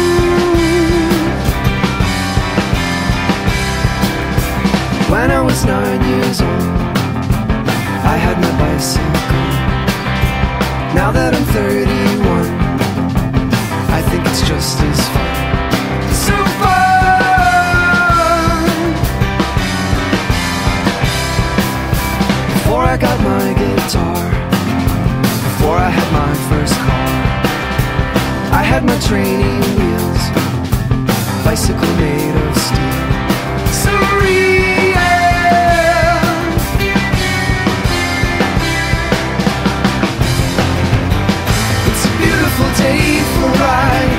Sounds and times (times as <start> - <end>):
Bass drum: 0.0 - 44.1
Drum kit: 0.0 - 44.1.